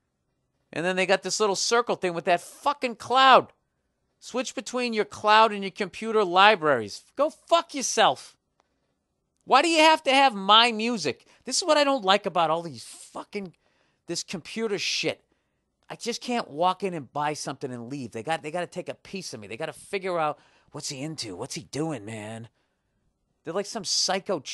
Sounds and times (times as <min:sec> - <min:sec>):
Speech: 0:00.7 - 0:03.6, 0:04.2 - 0:08.4, 0:09.5 - 0:15.2, 0:15.9 - 0:22.6, 0:23.4 - 0:24.5.